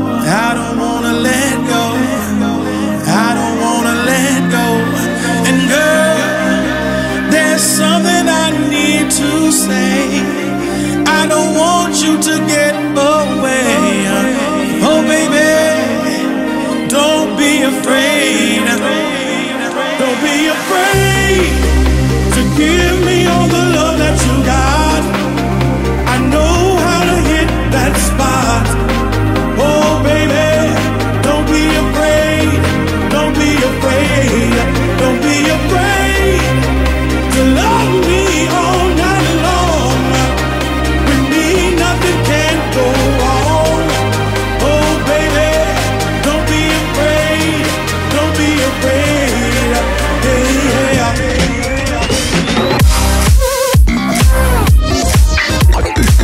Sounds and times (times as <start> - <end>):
House music: 0.0 - 56.2.